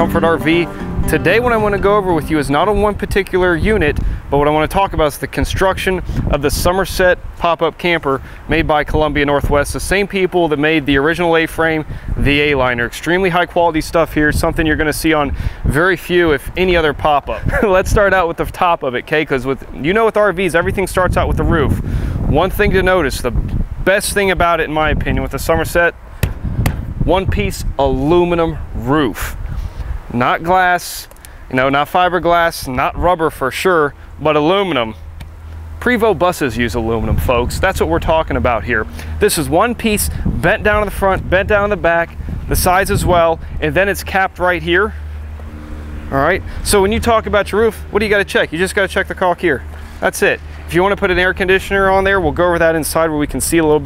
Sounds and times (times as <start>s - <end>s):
Speech: 0.0s - 26.0s, 27.1s - 29.4s, 30.1s - 35.0s, 35.8s - 45.0s, 46.1s - 53.8s.